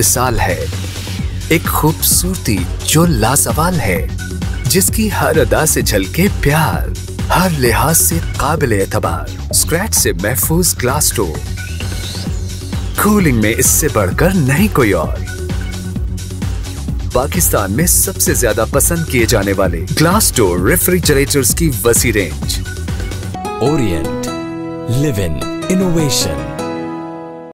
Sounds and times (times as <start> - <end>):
Speech: 0.0 - 0.7, 1.5 - 4.1, 4.7 - 11.4, 13.0 - 15.2, 17.2 - 22.6, 23.6 - 24.3, 24.9 - 26.5
Music: 0.0 - 27.5.